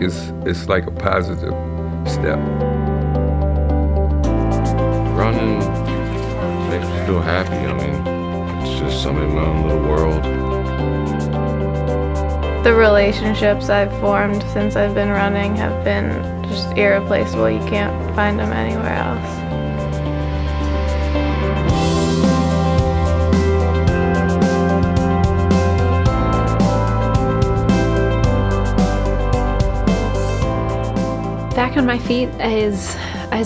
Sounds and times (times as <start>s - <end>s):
Speech: 0.0s - 2.5s, 5.2s - 5.8s, 6.6s - 8.0s, 8.6s - 10.3s, 12.7s - 19.2s, 31.6s - 33.4s
Music: 0.0s - 33.4s.